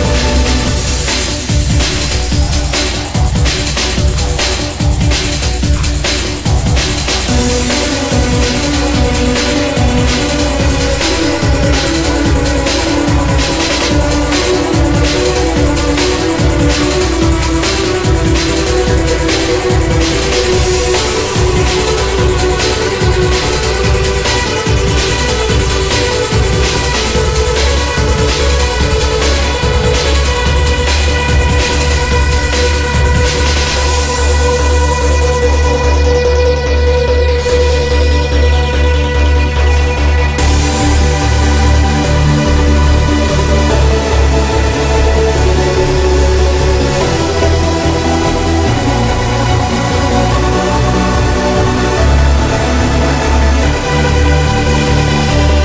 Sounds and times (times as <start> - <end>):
Soundtrack music: 0.0 - 55.6.